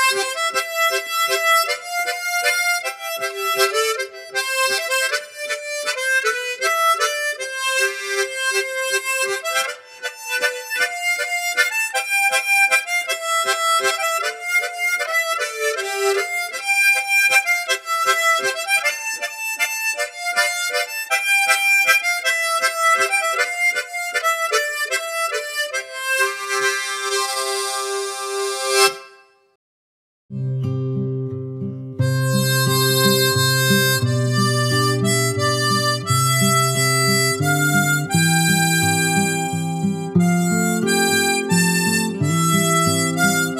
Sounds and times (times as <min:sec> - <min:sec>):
Music: 0:00.0 - 0:29.6, 0:30.3 - 0:43.5.